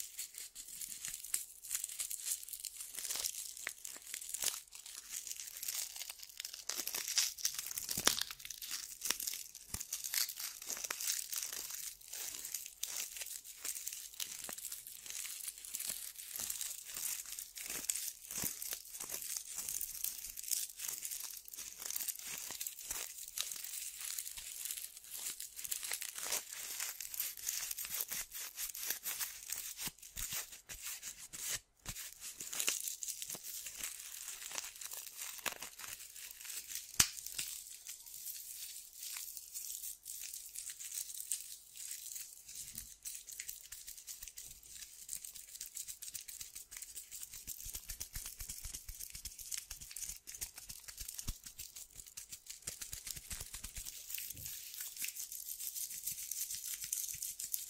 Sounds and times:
Tearing: 0.2s - 57.6s.

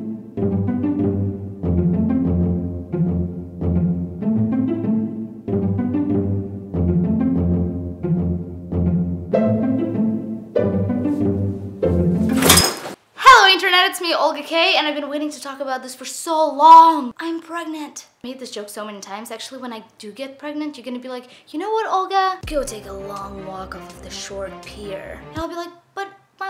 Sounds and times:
Music: 0.0s - 12.6s, 22.4s - 25.5s
Speech: 13.2s - 26.5s.

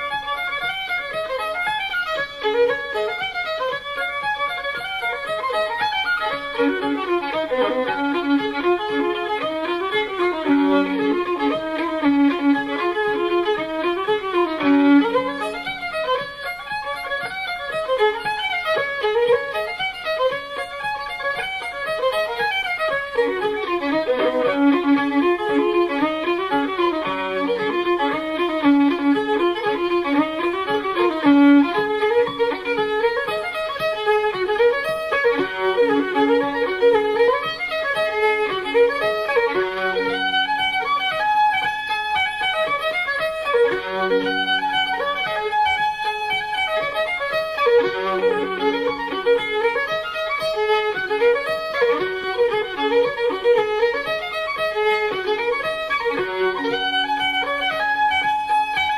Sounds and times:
Violin, fiddle: 0.0s - 58.9s.

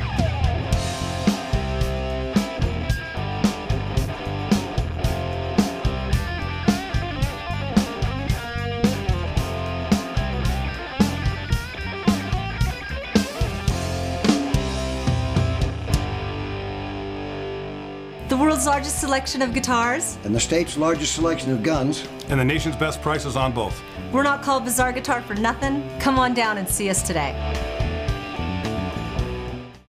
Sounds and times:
Guitar: 0.0s - 29.9s
Speech: 18.3s - 27.4s.

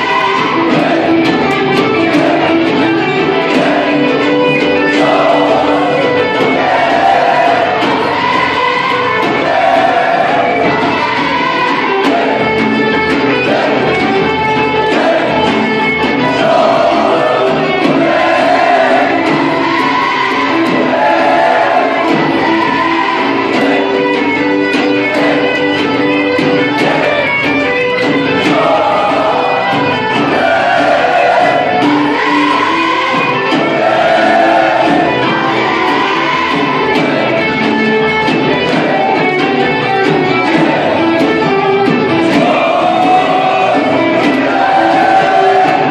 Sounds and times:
Music: 0.0s - 45.9s
Singing: 0.0s - 45.9s.

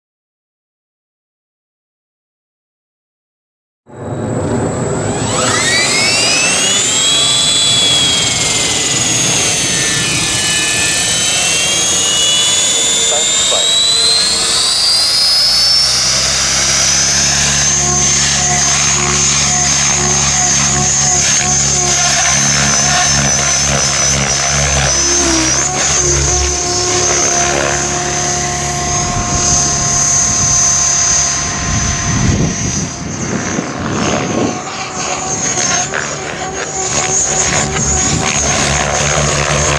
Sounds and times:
Outside, rural or natural: 3.9s - 39.7s
Speech: 11.9s - 14.5s, 25.0s - 25.8s.

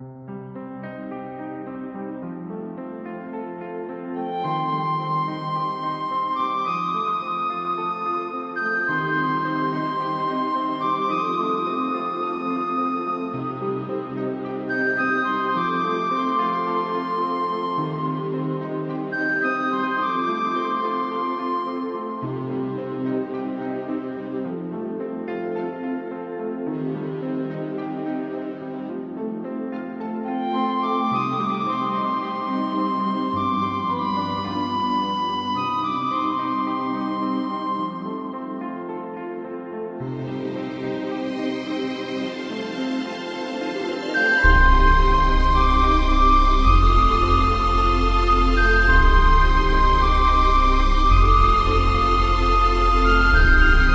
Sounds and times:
Background music: 0.0s - 53.9s.

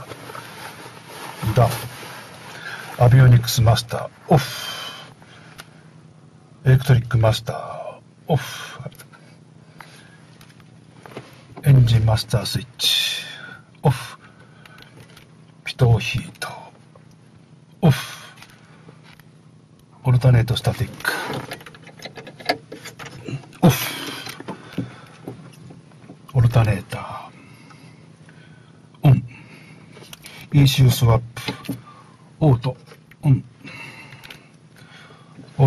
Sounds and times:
Speech: 1.4s - 1.9s, 3.0s - 4.6s, 6.6s - 9.0s, 11.6s - 14.2s, 15.6s - 16.8s, 17.8s - 18.3s, 20.0s - 21.4s, 26.3s - 27.4s, 29.0s - 29.3s, 30.5s - 31.7s, 32.4s - 33.5s.

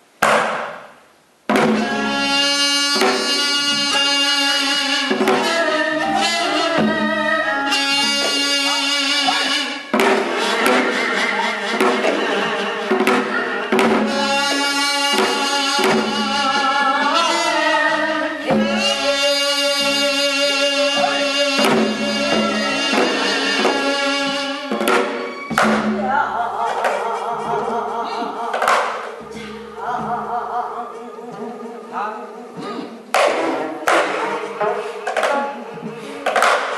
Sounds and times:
Traditional music: 1.5s - 36.7s.

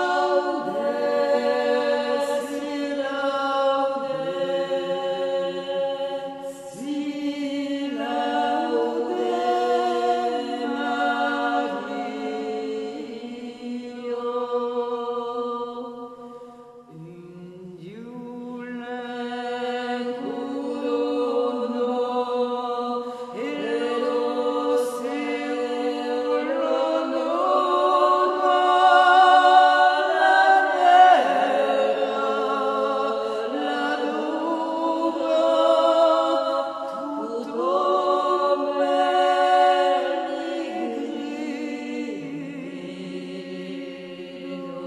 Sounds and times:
Music: 0.0s - 44.8s.

